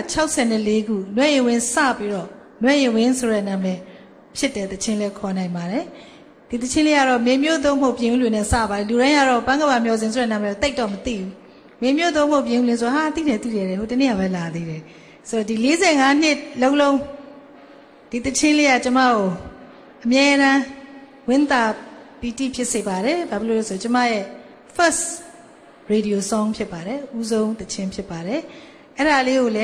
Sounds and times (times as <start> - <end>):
Speech: 0.0 - 17.2, 18.1 - 25.3, 25.9 - 29.6.